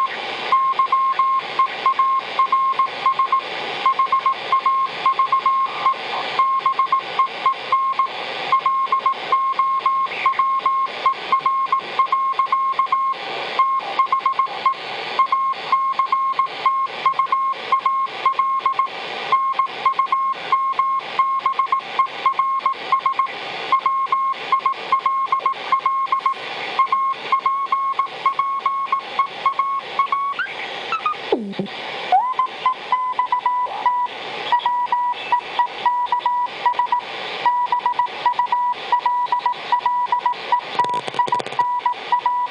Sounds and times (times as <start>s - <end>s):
Radio: 0.0s - 42.5s.